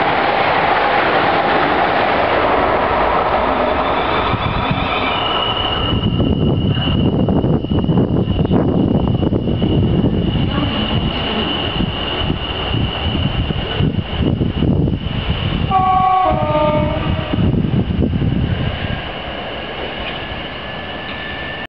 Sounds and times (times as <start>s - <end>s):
Outside, urban or manmade: 0.0s - 21.6s
Train: 0.0s - 21.6s
Vehicle horn, car horn, honking: 15.7s - 17.4s.